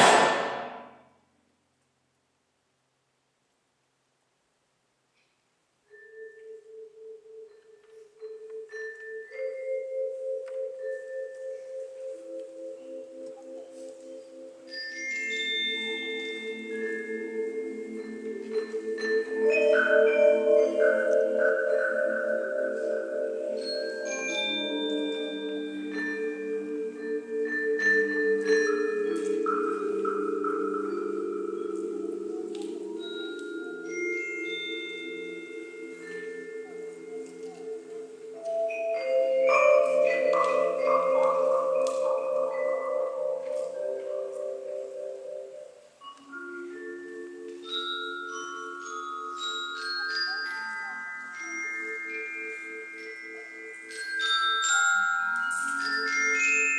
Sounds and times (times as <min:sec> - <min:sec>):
Marimba, xylophone: 0:05.8 - 0:56.7.